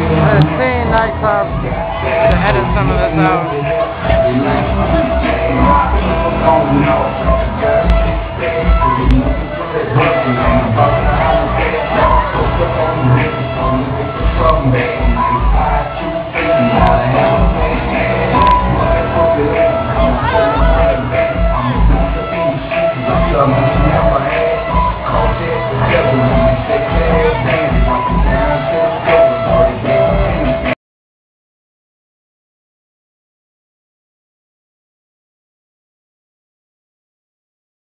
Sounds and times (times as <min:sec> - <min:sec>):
Music: 0:00.0 - 0:30.8.